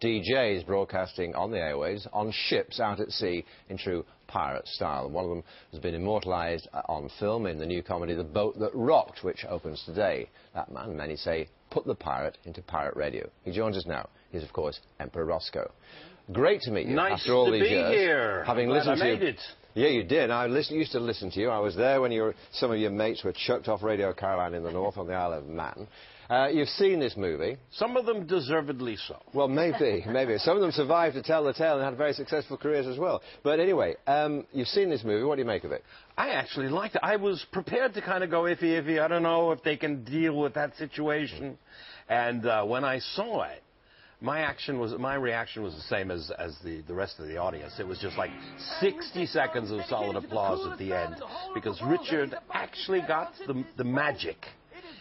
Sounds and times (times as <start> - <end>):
Speech: 0.0 - 43.6, 44.2 - 54.9.